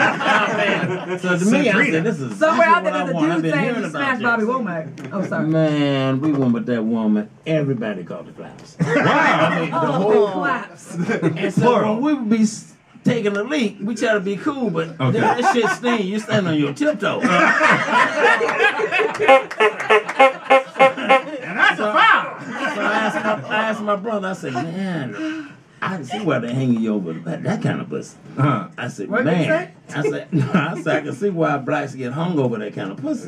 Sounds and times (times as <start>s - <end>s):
Speech: 0.4s - 17.4s, 21.3s - 33.2s.